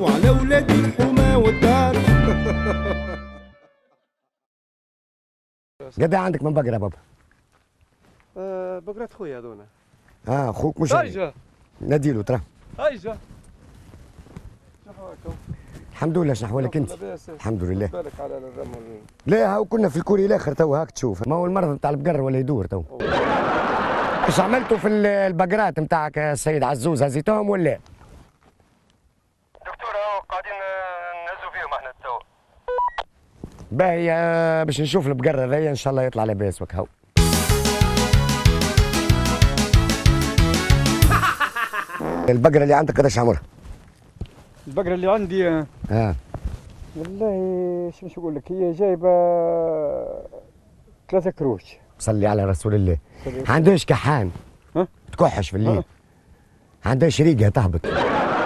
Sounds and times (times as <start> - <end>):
Speech: 5.8 - 7.0, 8.4 - 9.7, 14.8 - 15.4, 16.0 - 23.0, 24.3 - 27.8, 29.6 - 32.2, 33.7 - 36.9, 44.7 - 46.2, 47.0 - 50.5, 51.1 - 55.9, 56.8 - 57.9.